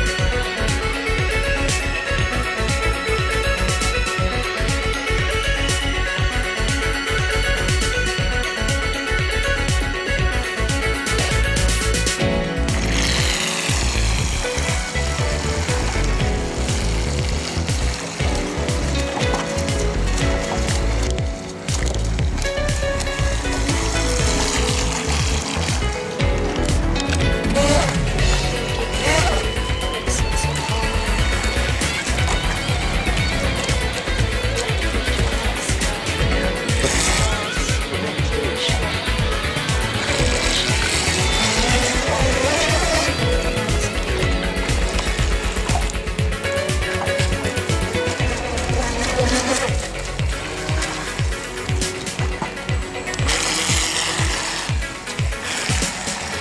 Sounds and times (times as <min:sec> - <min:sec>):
Motorboat, speedboat: 0:00.0 - 0:56.4
Music: 0:00.0 - 0:56.4.